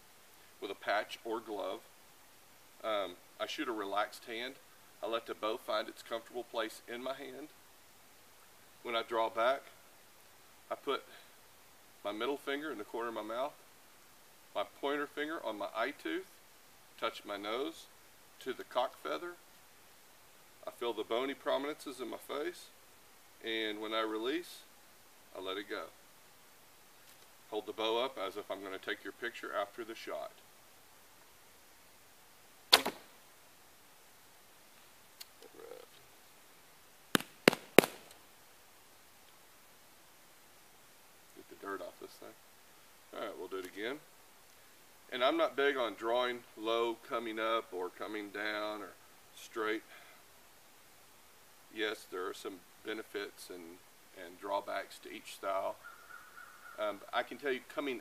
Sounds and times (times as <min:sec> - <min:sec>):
Arrow: 0:32.7 - 0:33.2, 0:37.2 - 0:38.2.